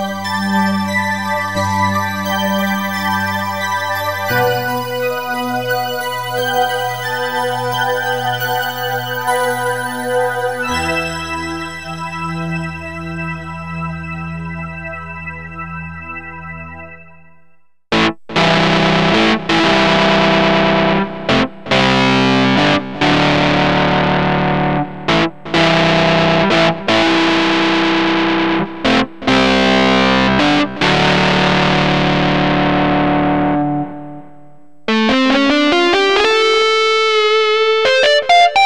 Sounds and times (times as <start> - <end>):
Music: 0.0 - 38.6.